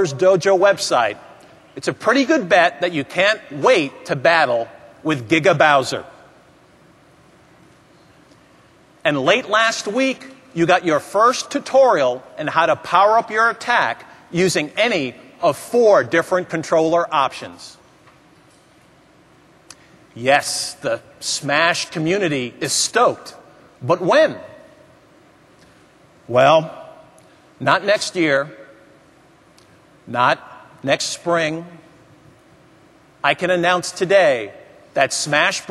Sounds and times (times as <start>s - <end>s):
Speech: 0.0s - 1.2s, 1.8s - 6.2s, 9.0s - 17.8s, 20.2s - 24.6s, 26.3s - 27.0s, 27.6s - 28.7s, 30.1s - 31.9s, 33.2s - 35.7s.